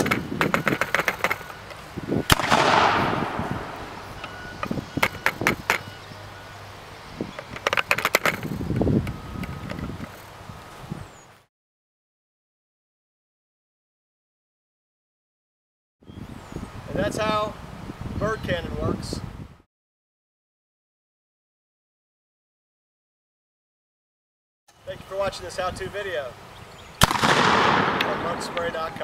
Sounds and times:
Speech: 0:16.9 - 0:17.6, 0:18.2 - 0:19.2, 0:24.8 - 0:26.4, 0:28.0 - 0:29.0.

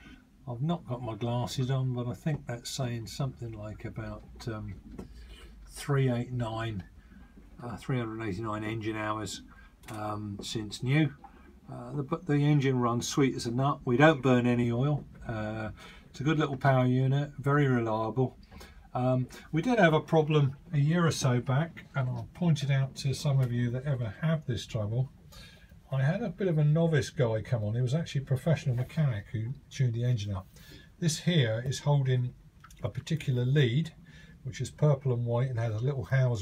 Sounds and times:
Speech: 0:00.0 - 0:05.0, 0:05.7 - 0:07.0, 0:07.6 - 0:25.2, 0:25.9 - 0:36.4.

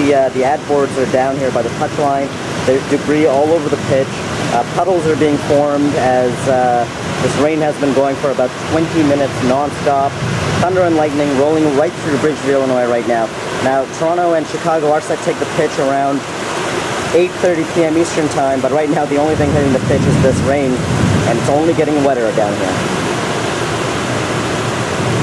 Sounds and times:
Speech: 0:00.0 - 0:16.2, 0:17.1 - 0:22.8
Waterfall: 0:00.0 - 0:25.2.

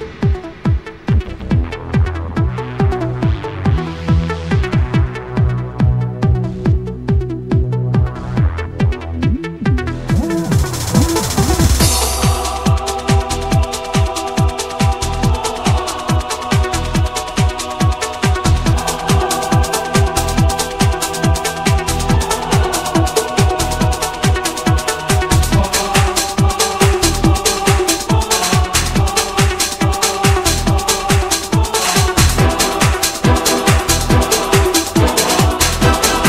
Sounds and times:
Techno: 0:00.0 - 0:36.2.

